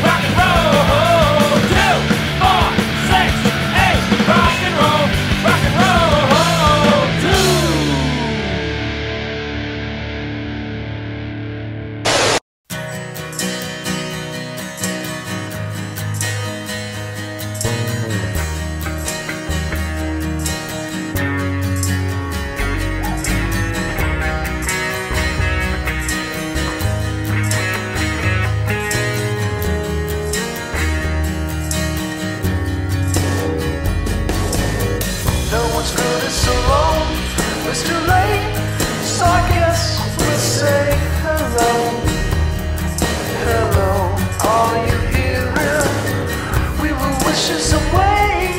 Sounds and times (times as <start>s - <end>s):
Punk rock: 0.0s - 12.4s, 18.1s - 48.5s.